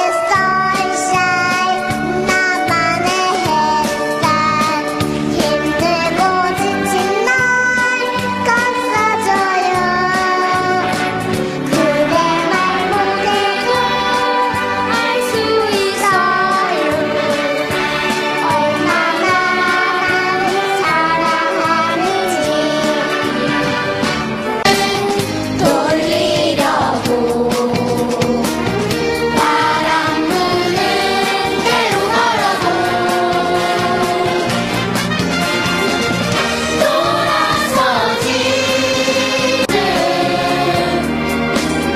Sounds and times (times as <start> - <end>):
Child singing: 0.0 - 11.1, 11.7 - 17.5, 18.4 - 23.2, 24.8 - 28.4, 29.4 - 34.4
Happy music: 0.0 - 41.9
Choir: 11.7 - 23.7, 24.6 - 28.6, 29.3 - 34.7, 36.4 - 41.4.